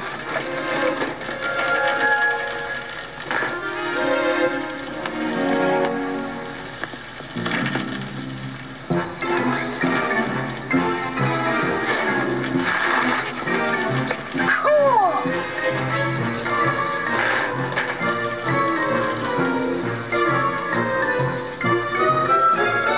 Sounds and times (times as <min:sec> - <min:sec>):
Bicycle: 0:00.0 - 0:22.9
Music: 0:00.0 - 0:22.9.